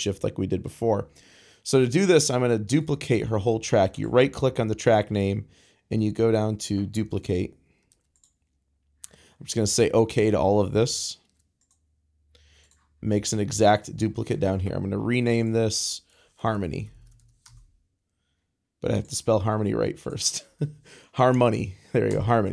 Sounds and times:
Speech: 0.0s - 7.6s, 9.4s - 11.2s, 13.0s - 17.0s, 18.8s - 20.6s, 21.2s - 22.5s.

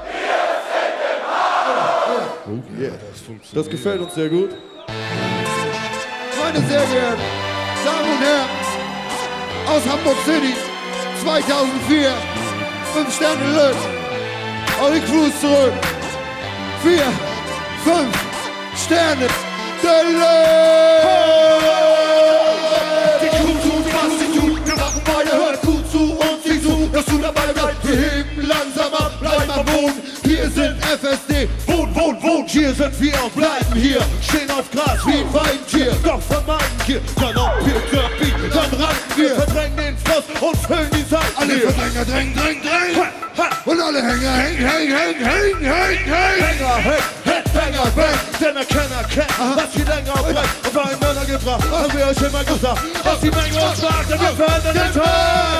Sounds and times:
Music: 3.3s - 55.5s.

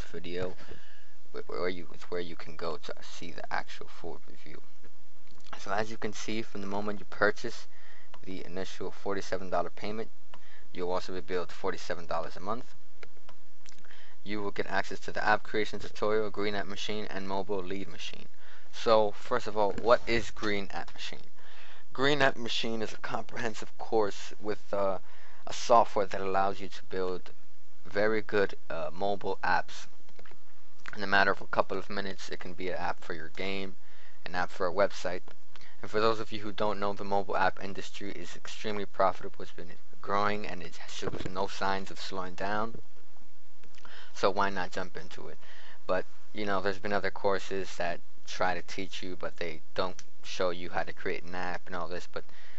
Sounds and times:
Speech: 0.0s - 0.7s, 1.3s - 4.7s, 5.5s - 10.1s, 10.7s - 12.8s, 14.2s - 21.3s, 21.9s - 27.3s, 27.9s - 29.9s, 30.9s - 35.2s, 35.8s - 42.8s, 44.1s - 52.3s.

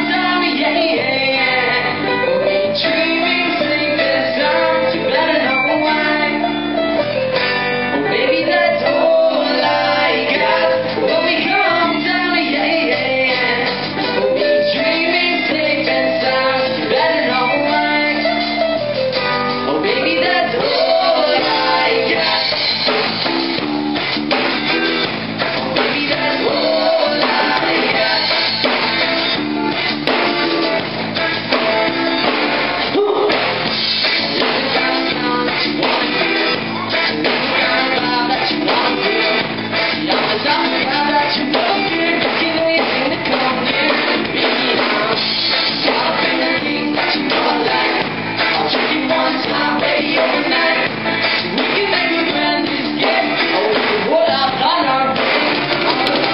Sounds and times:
Music: 0.0s - 56.3s.

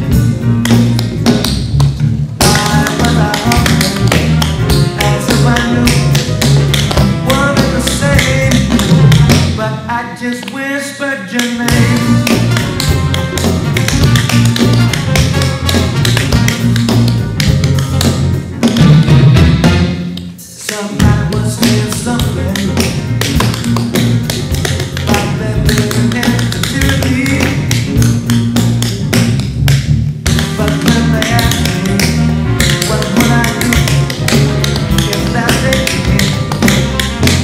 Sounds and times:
Music: 0.0s - 37.4s.

